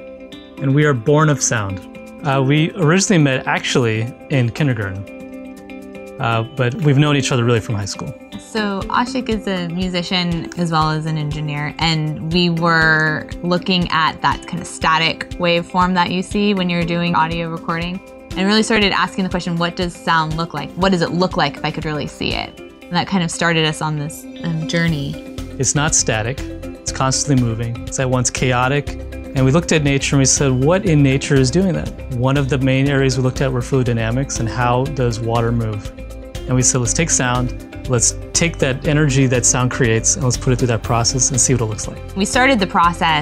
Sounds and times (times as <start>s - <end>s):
Music: 0.0s - 43.2s
Speech: 0.6s - 5.0s, 6.2s - 35.9s, 36.5s - 43.2s.